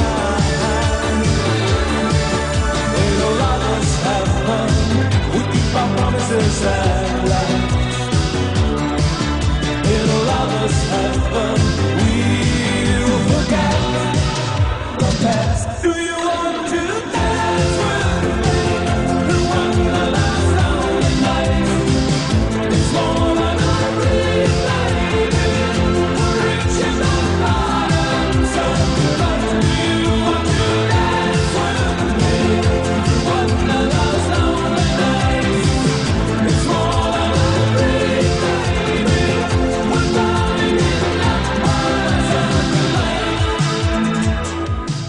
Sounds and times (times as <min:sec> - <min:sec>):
Music: 0:00.0 - 0:45.0.